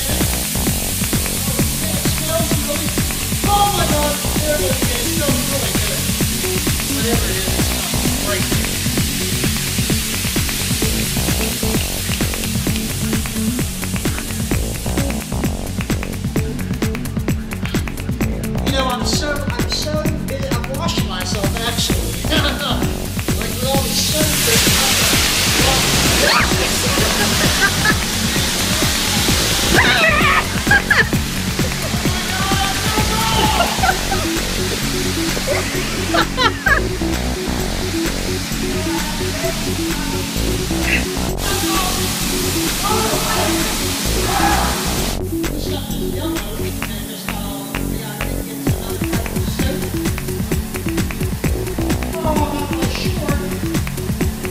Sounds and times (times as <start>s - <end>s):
Music: 0.0s - 54.5s
Speech: 1.4s - 6.1s, 6.9s - 8.8s, 18.6s - 27.4s, 31.9s - 34.2s, 38.7s - 40.3s, 40.9s - 42.0s, 42.8s - 44.8s, 45.5s - 49.9s, 52.1s - 53.6s.